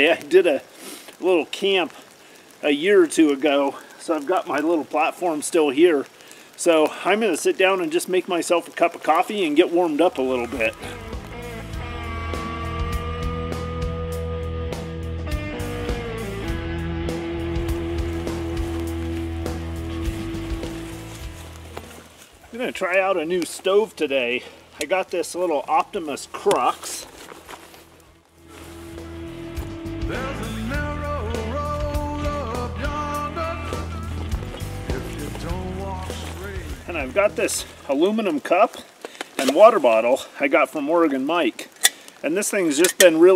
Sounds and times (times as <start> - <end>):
Speech: 0.0 - 2.0, 2.6 - 10.9, 22.5 - 27.1, 36.9 - 43.3
Music: 10.3 - 22.0, 28.4 - 37.8.